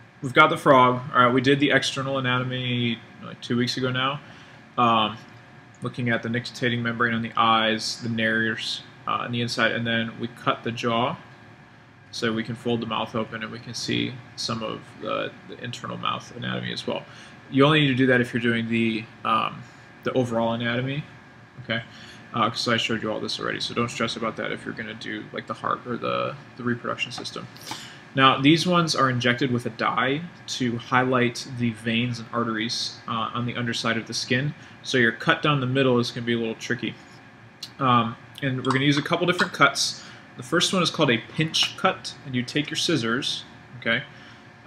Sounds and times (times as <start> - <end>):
Speech: 0.2 - 4.2, 4.8 - 5.2, 5.8 - 11.3, 12.1 - 37.0, 37.6 - 44.1.